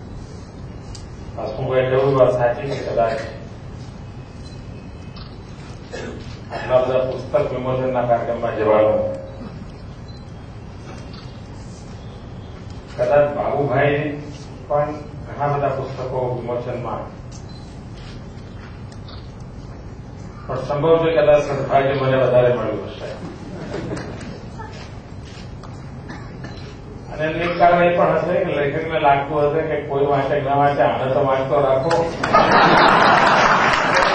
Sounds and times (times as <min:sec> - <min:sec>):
Male speech, man speaking: 0:01.4 - 0:03.4, 0:06.5 - 0:09.2, 0:13.0 - 0:17.1, 0:20.5 - 0:23.2, 0:27.1 - 0:32.2.